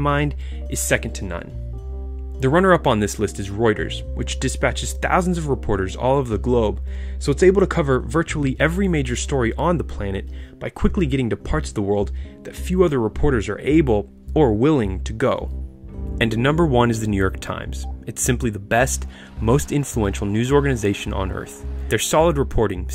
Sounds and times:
Speech: 0.0s - 1.5s, 2.4s - 15.5s, 16.2s - 22.9s
Music: 0.0s - 22.9s.

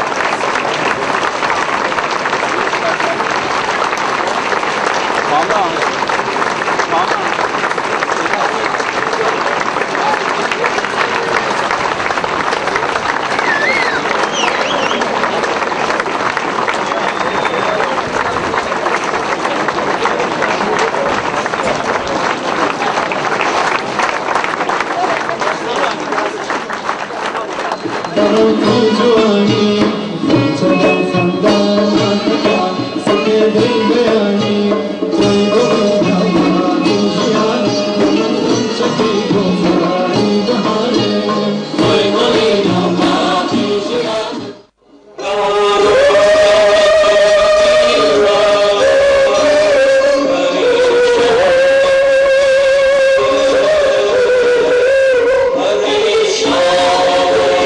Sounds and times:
Music: 28.1s - 57.6s.

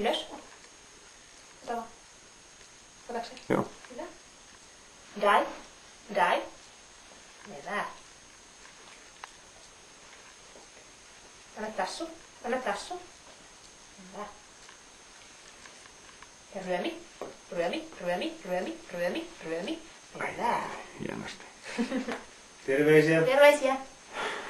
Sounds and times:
Speech: 16.6s - 21.4s.

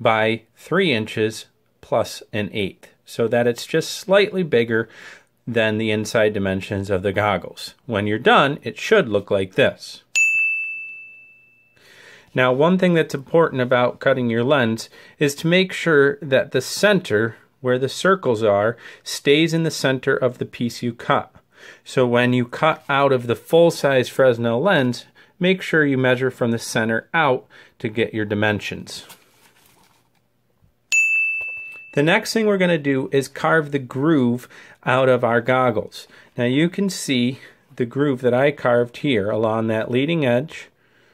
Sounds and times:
Speech: 0.0s - 10.1s, 12.3s - 29.2s, 32.0s - 40.8s
Inside, small room: 0.0s - 41.1s.

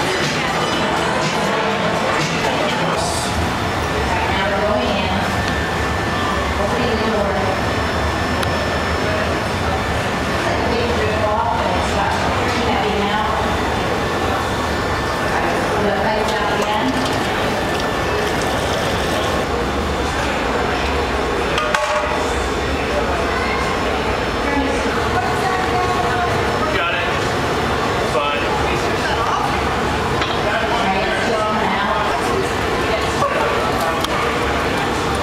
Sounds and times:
Speech: 0.0s - 17.7s, 20.0s - 27.3s, 28.0s - 35.2s.

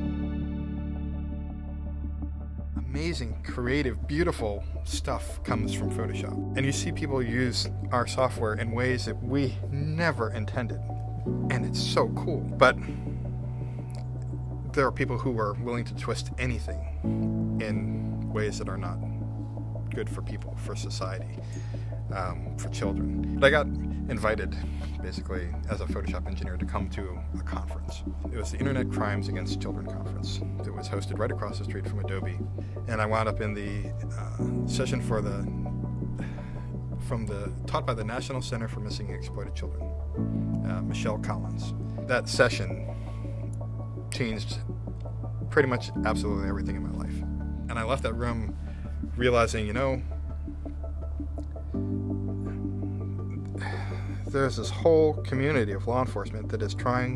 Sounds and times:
Music: 0.0s - 57.1s
Speech: 2.8s - 12.9s, 14.7s - 16.9s, 17.6s - 19.1s, 19.9s - 21.4s, 22.1s - 35.6s, 37.0s - 39.9s, 40.6s - 42.9s, 44.1s - 44.7s, 45.5s - 48.6s, 49.2s - 50.1s, 54.2s - 57.1s.

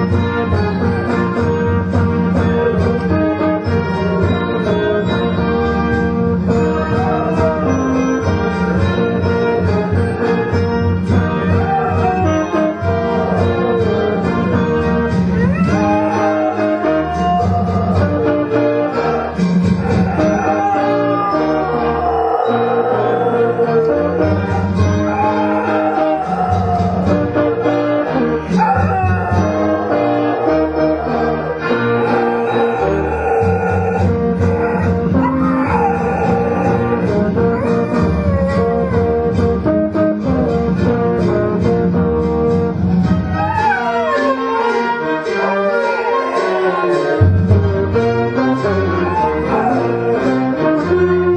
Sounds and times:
Music: 0.0s - 51.3s
Howl: 2.4s - 39.6s, 42.9s - 51.3s.

